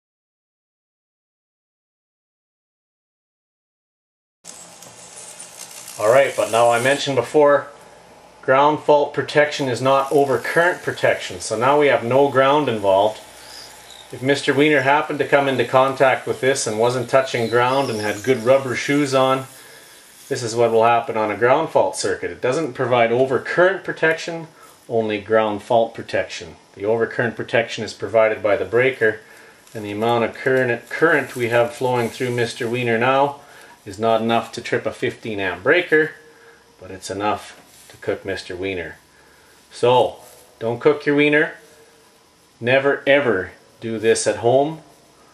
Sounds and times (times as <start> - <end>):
Speech: 6.0 - 7.7, 8.4 - 13.3, 14.1 - 19.6, 20.3 - 36.2, 36.8 - 39.0, 39.7 - 41.6, 42.6 - 44.8.